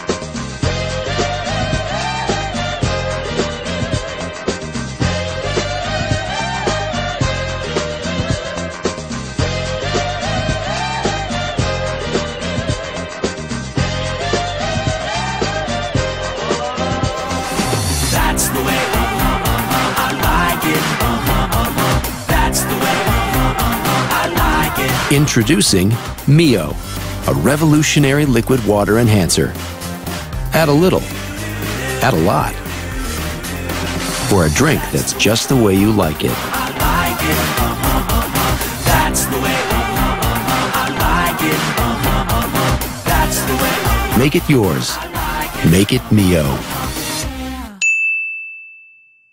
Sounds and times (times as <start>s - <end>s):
Music: 0.0s - 47.8s
Speech: 25.0s - 29.6s, 30.5s - 31.1s, 32.0s - 32.6s, 34.2s - 36.4s, 44.2s - 45.0s, 45.6s - 46.7s.